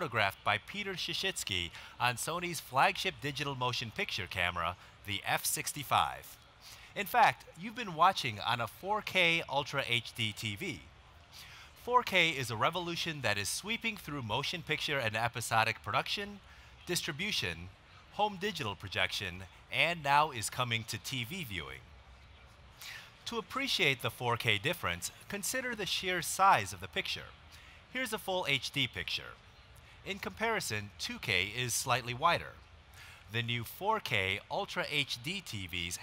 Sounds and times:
Speech: 0.0 - 10.9, 11.8 - 21.8, 23.2 - 29.4, 30.0 - 32.6, 33.3 - 36.0.

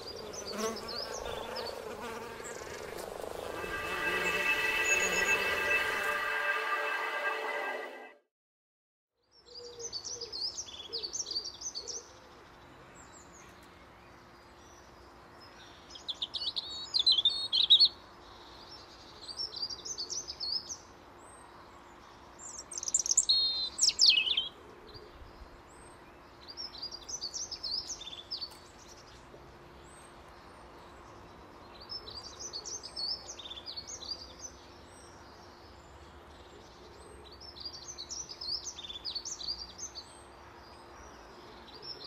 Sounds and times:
Chirp, tweet: 0.0 - 2.7, 9.2 - 42.0.

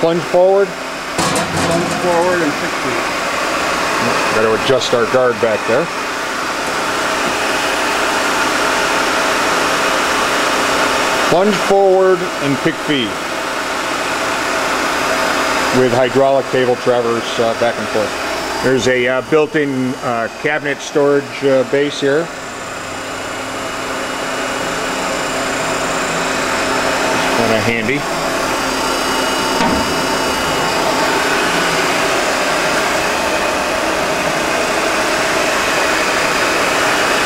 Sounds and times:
Speech: 0.0 - 0.8, 1.9 - 3.0, 4.0 - 6.0, 11.3 - 13.2, 15.7 - 22.3, 27.2 - 28.1.

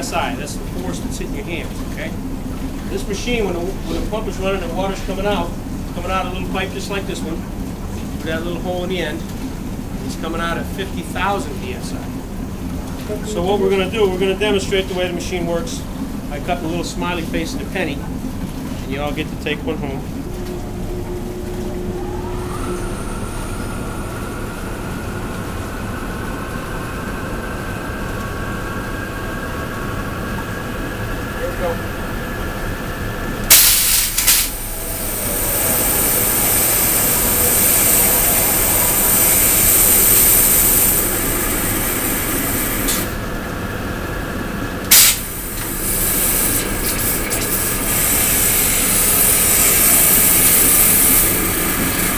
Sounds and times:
Speech: 0.0 - 2.2, 2.9 - 7.5, 8.2 - 9.3, 10.0 - 12.2, 13.0 - 18.1, 18.8 - 20.1, 31.4 - 31.9.

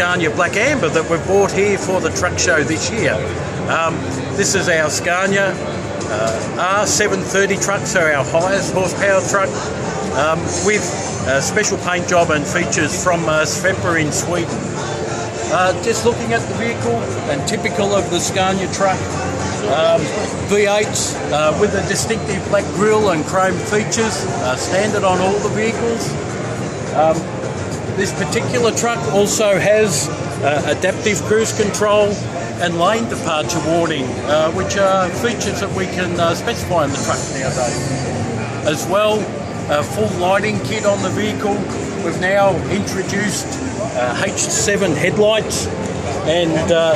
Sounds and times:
Speech: 0.0 - 14.8, 15.4 - 26.2, 26.9 - 27.3, 28.0 - 38.0, 38.6 - 46.9
Music: 0.0 - 46.9.

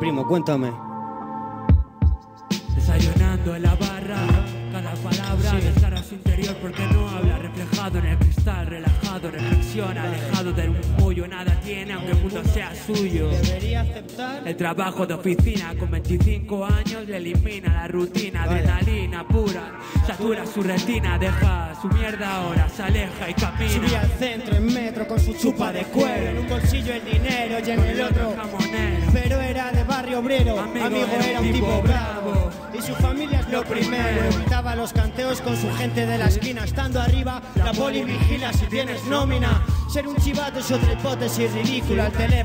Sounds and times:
Music: 0.0 - 42.4.

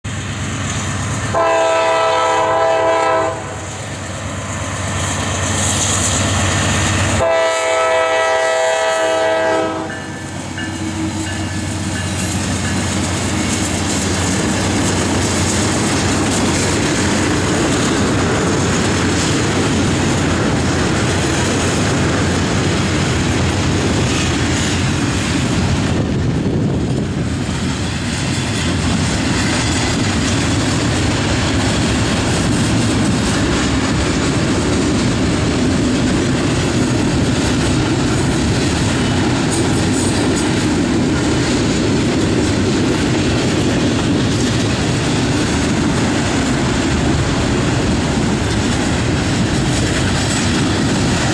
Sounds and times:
Railroad car, train wagon: 0.0 - 51.3
Train horn: 1.3 - 3.8, 7.1 - 11.8
Clickety-clack: 9.5 - 51.3.

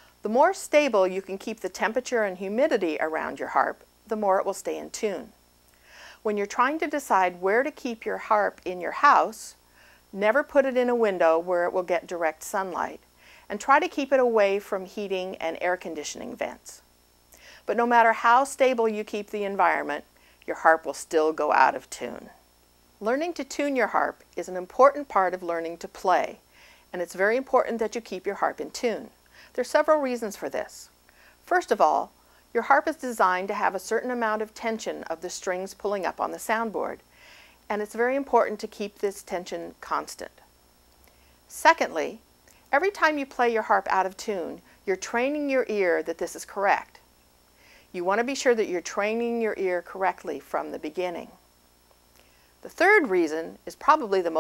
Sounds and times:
Speech: 0.2 - 5.3, 6.3 - 9.6, 10.2 - 16.8, 17.7 - 22.4, 23.0 - 30.9, 31.5 - 37.0, 37.7 - 40.4, 41.5 - 47.0, 48.0 - 51.4, 52.6 - 54.4.

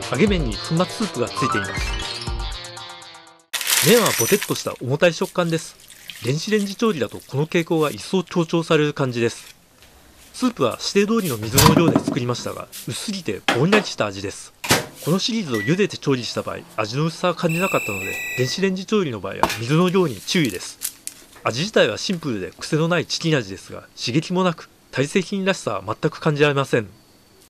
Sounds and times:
Speech: 0.0 - 1.7, 3.8 - 9.5, 10.4 - 20.8, 21.4 - 27.0.

